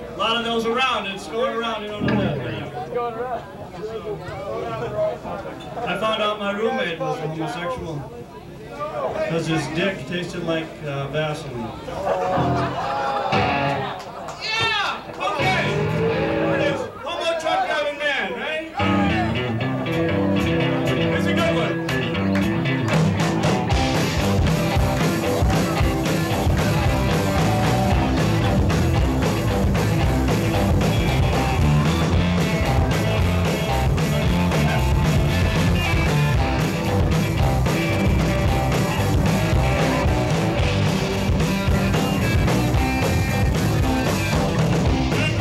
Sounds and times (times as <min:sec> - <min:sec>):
Speech: 0:00.0 - 0:12.1, 0:14.3 - 0:15.8, 0:16.5 - 0:19.5, 0:20.9 - 0:21.8
Music: 0:02.0 - 0:02.6, 0:12.3 - 0:13.9, 0:15.4 - 0:16.8, 0:18.8 - 0:45.4.